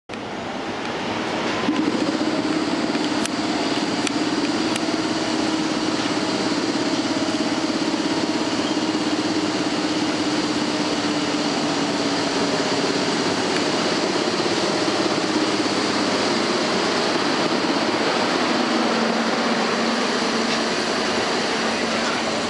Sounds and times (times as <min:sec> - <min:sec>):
Railroad car, train wagon: 0:00.1 - 0:22.4
Train: 0:00.1 - 0:22.4.